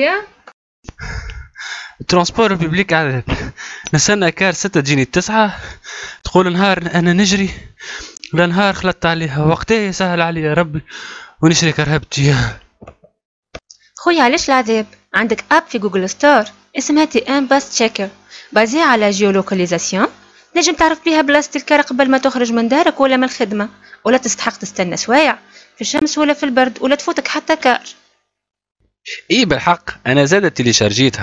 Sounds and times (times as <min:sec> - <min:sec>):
Speech: 0:02.0 - 0:03.3, 0:03.9 - 0:05.6, 0:06.3 - 0:10.8, 0:11.4 - 0:12.6, 0:14.0 - 0:27.9, 0:29.1 - 0:31.2.